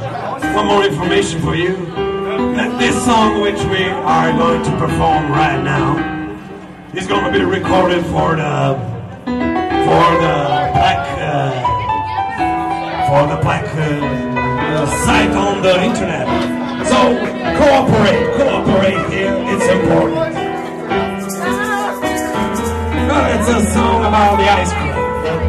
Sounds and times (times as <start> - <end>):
Speech: 0.0 - 6.0, 7.0 - 8.9, 9.8 - 20.4, 23.0 - 25.4
Music: 0.0 - 25.4.